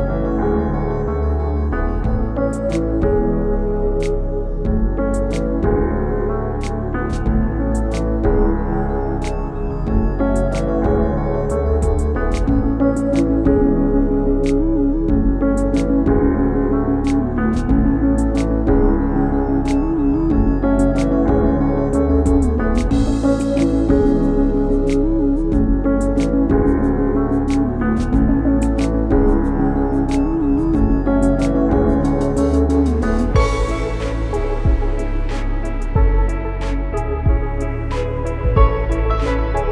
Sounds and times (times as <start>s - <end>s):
Music: 0.0s - 39.7s.